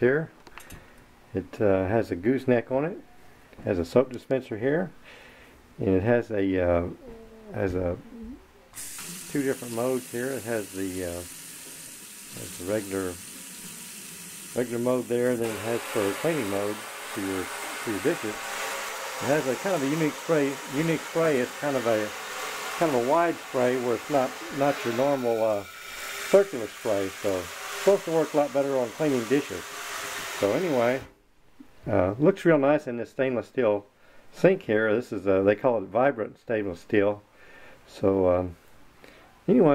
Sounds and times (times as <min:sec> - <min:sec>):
Speech: 0:00.0 - 0:00.3, 0:01.4 - 0:03.0, 0:03.6 - 0:05.0, 0:05.8 - 0:08.4, 0:09.3 - 0:11.3, 0:12.3 - 0:13.2, 0:14.6 - 0:18.4, 0:19.2 - 0:22.1, 0:22.8 - 0:25.7, 0:26.4 - 0:29.6, 0:30.4 - 0:31.1, 0:31.8 - 0:37.2, 0:37.9 - 0:38.6, 0:39.5 - 0:39.7
Water tap, faucet: 0:08.8 - 0:31.1.